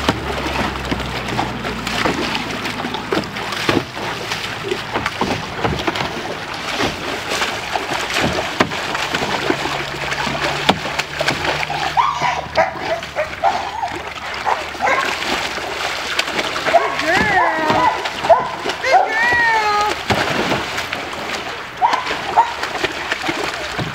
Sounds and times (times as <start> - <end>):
Gurgling: 0.0 - 23.9.